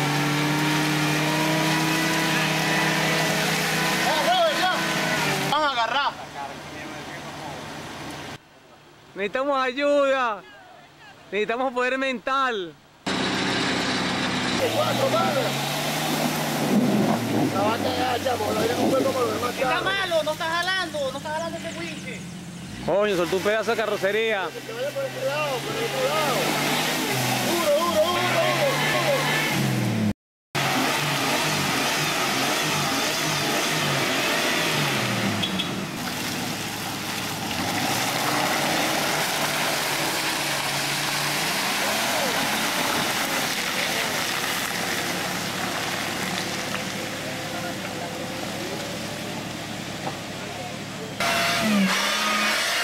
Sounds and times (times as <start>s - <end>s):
Car: 0.0s - 9.1s, 12.8s - 52.8s
Speech: 14.6s - 15.6s, 17.6s - 22.2s, 22.9s - 26.5s, 27.5s - 29.4s.